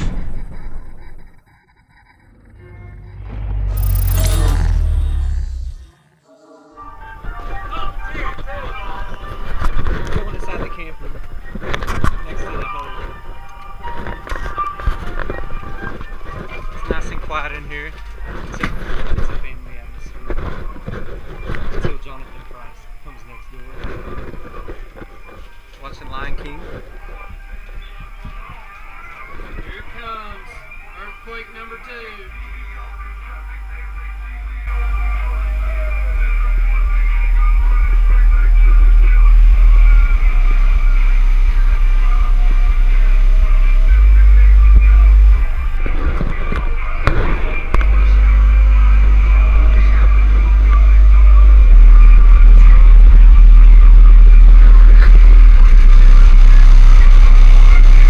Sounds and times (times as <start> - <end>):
Music: 6.2 - 23.1, 24.1 - 58.0
Speech: 7.3 - 11.1, 16.5 - 20.8, 21.8 - 25.0, 25.8 - 55.6.